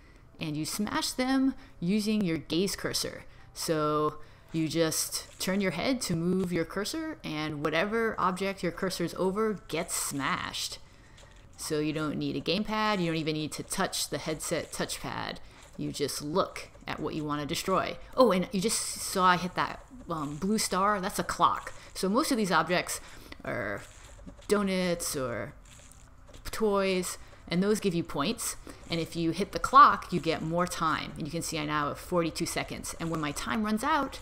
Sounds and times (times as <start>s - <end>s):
Speech: 0.4s - 10.8s, 11.6s - 23.9s, 24.5s - 25.6s, 26.5s - 34.2s.